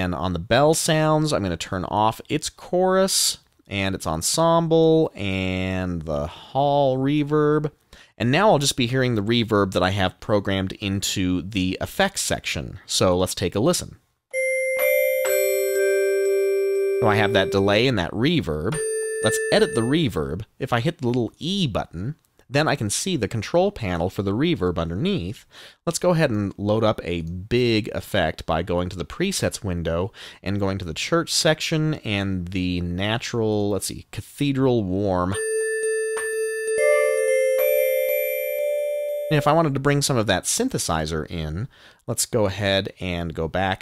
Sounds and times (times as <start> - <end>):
Speech: 0.0 - 14.0, 17.0 - 35.4, 39.3 - 43.8
Musical instrument: 14.3 - 17.9, 18.8 - 19.9, 35.8 - 39.6.